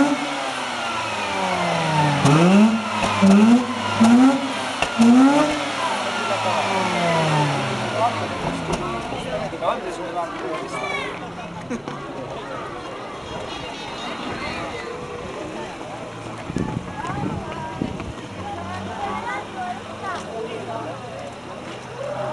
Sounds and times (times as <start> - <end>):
Crowd: 0.0 - 22.3
Speech: 5.6 - 22.3.